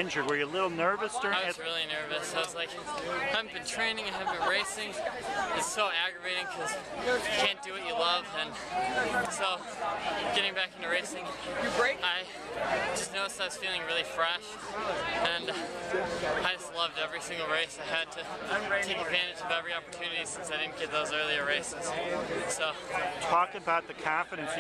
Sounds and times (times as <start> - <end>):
Speech: 0.0 - 24.6.